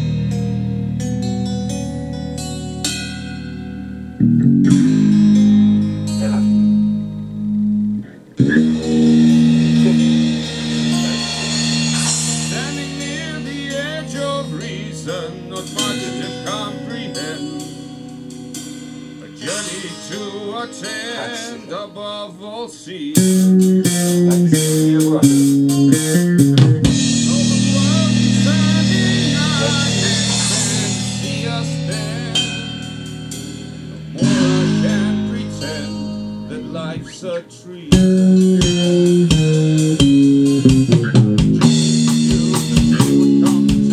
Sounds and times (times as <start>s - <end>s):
Bass guitar: 0.0s - 22.2s, 23.1s - 43.9s
Acoustic guitar: 0.0s - 43.9s
Speech: 6.1s - 6.7s, 12.0s - 17.6s, 24.3s - 25.5s, 27.1s - 32.5s, 34.2s - 38.0s, 42.3s - 43.9s.